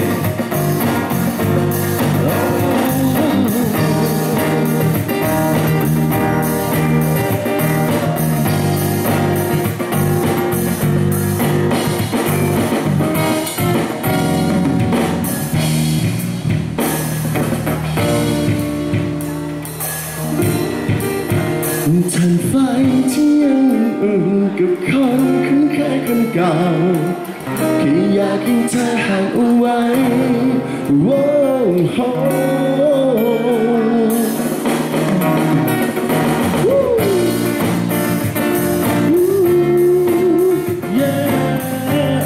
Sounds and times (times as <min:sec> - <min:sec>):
Music: 0:00.0 - 0:42.2.